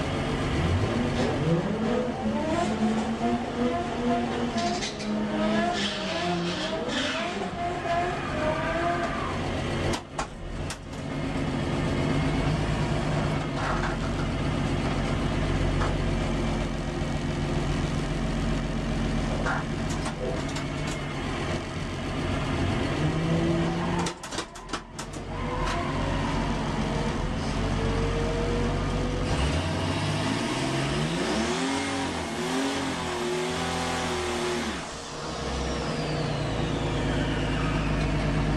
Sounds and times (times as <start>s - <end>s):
Car: 0.0s - 38.5s.